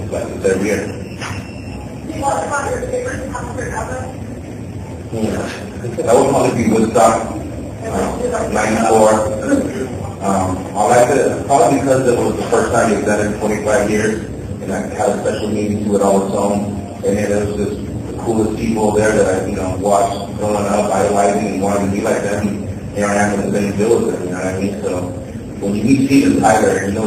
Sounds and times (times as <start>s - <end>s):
Speech: 0.0s - 1.0s, 2.1s - 4.2s, 5.1s - 27.0s.